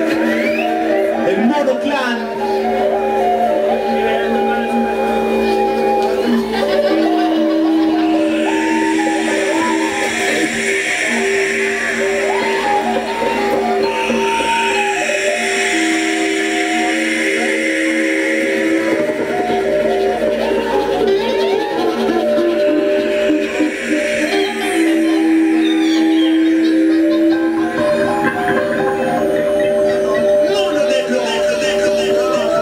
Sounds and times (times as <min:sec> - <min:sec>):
Music: 0:00.0 - 0:32.6
Sound effect: 0:07.6 - 0:32.6.